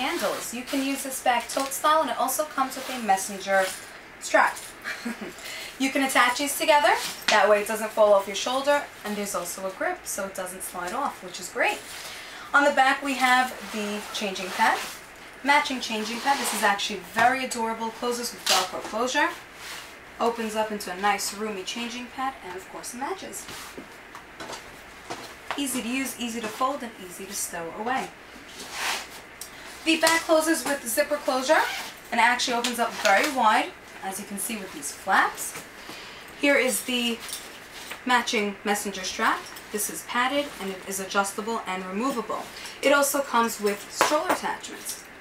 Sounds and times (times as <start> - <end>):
Speech: 0.0 - 4.6, 5.8 - 11.8, 12.5 - 19.4, 20.2 - 23.6, 25.6 - 28.2, 29.8 - 35.6, 36.4 - 37.3, 38.0 - 45.0.